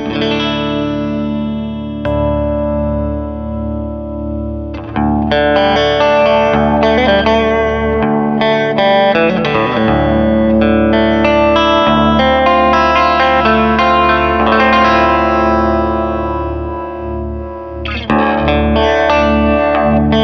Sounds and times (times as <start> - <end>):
Music: 0.0 - 20.2.